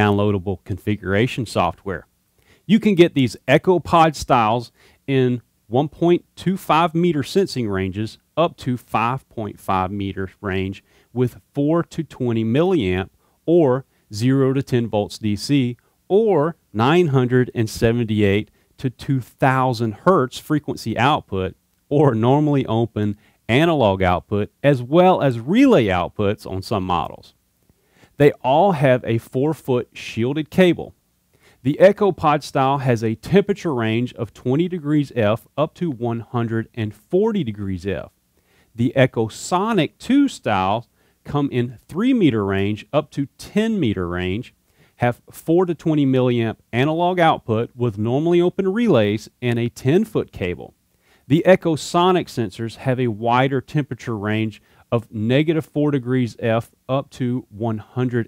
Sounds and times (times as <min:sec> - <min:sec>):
Speech: 0:00.0 - 0:02.1, 0:02.7 - 0:27.4, 0:28.2 - 0:31.0, 0:31.6 - 0:38.1, 0:38.8 - 0:58.2.